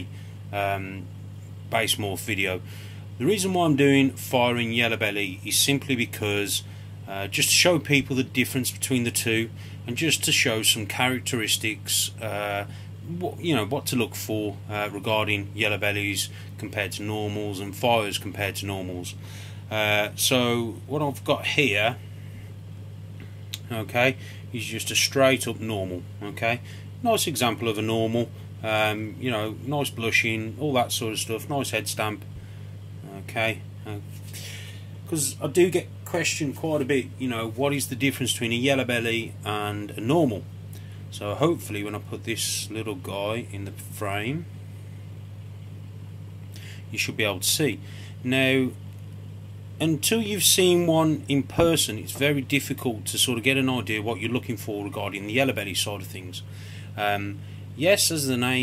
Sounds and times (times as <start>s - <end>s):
Speech: 0.0s - 1.1s, 1.7s - 2.6s, 3.2s - 22.0s, 23.6s - 32.3s, 33.0s - 34.2s, 35.1s - 40.4s, 41.1s - 44.5s, 46.9s - 48.8s, 49.8s - 58.6s
Inside, small room: 0.0s - 58.6s.